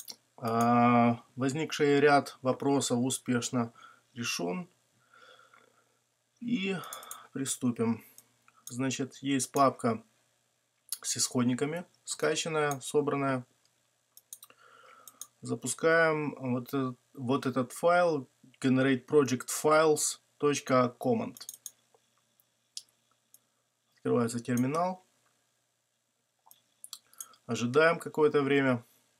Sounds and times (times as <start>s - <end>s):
Speech: 0.4s - 4.7s, 6.4s - 8.0s, 8.7s - 10.1s, 11.0s - 13.5s, 15.4s - 21.5s, 24.0s - 25.1s, 27.5s - 28.9s.